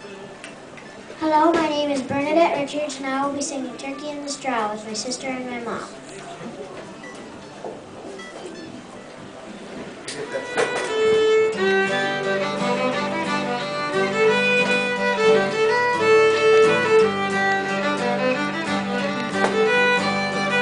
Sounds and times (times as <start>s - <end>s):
Speech: 1.2s - 7.0s
Music: 7.0s - 20.6s.